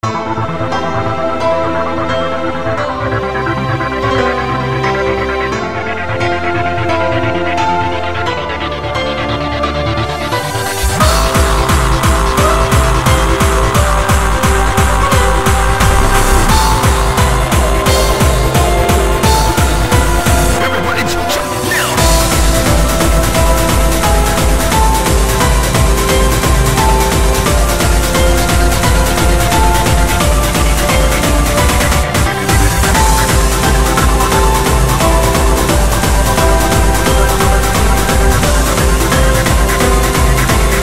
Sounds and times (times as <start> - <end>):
Techno: 0.0 - 40.8.